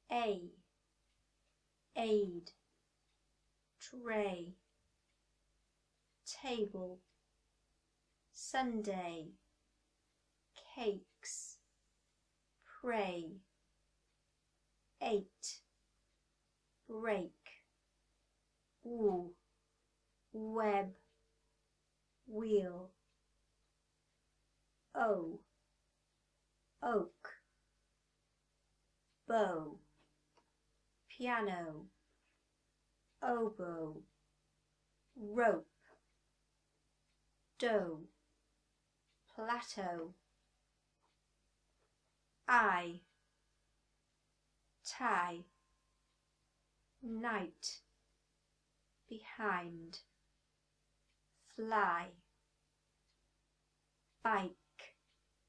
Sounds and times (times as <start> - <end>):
Speech: 0.0 - 0.6, 2.0 - 2.6, 3.8 - 4.6, 6.3 - 7.0, 8.4 - 9.4, 10.6 - 11.6, 12.7 - 13.4, 15.0 - 15.6, 16.9 - 17.6, 18.9 - 19.4, 20.4 - 21.0, 22.3 - 23.0, 25.0 - 25.4, 26.8 - 27.4, 29.3 - 29.8, 31.1 - 31.9, 33.2 - 34.0, 35.2 - 35.7, 37.6 - 38.1, 39.3 - 40.2, 42.5 - 43.0, 44.9 - 45.5, 47.0 - 47.8, 49.1 - 50.1, 51.4 - 52.2, 54.2 - 55.0.